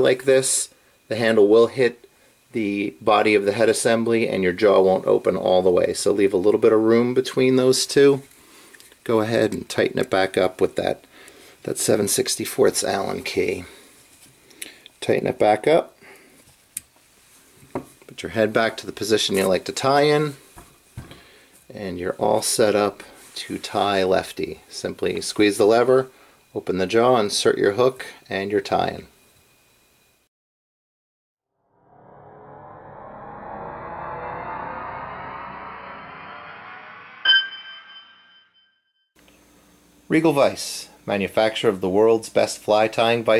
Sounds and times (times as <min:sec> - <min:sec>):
Speech: 0:00.0 - 0:08.3, 0:09.1 - 0:11.0, 0:11.6 - 0:13.8, 0:15.0 - 0:16.0, 0:18.1 - 0:20.4, 0:21.7 - 0:29.1, 0:40.1 - 0:43.3
Inside, small room: 0:00.0 - 0:30.3.